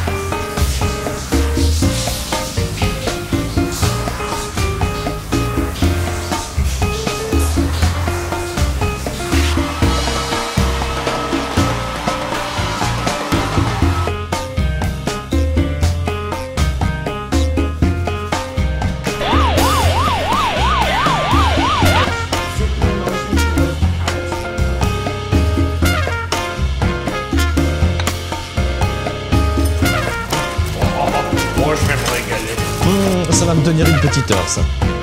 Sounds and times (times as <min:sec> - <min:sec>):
Music: 0:00.0 - 0:35.0.